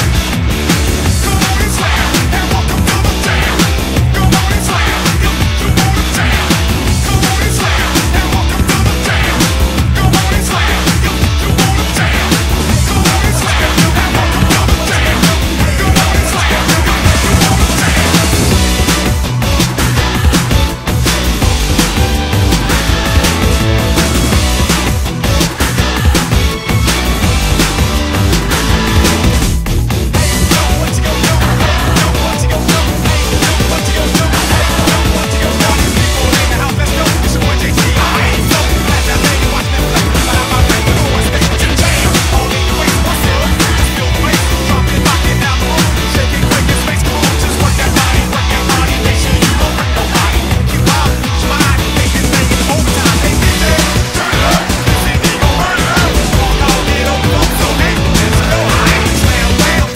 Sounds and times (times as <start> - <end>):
Music: 0.0 - 59.9.